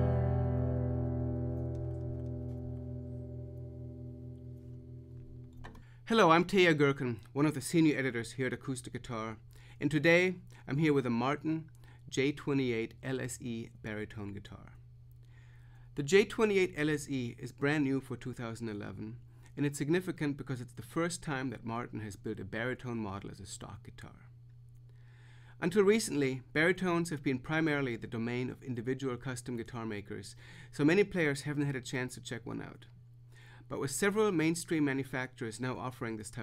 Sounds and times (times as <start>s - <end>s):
Acoustic guitar: 0.0s - 5.9s
Strum: 0.0s - 5.9s
Speech: 6.1s - 14.8s, 16.0s - 24.3s, 25.6s - 32.9s, 33.7s - 36.4s.